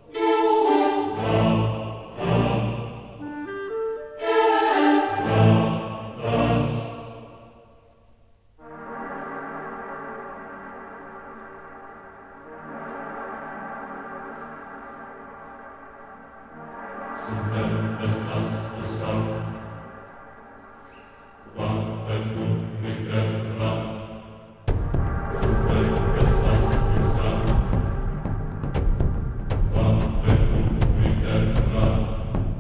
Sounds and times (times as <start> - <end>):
Music: 0.0 - 32.6.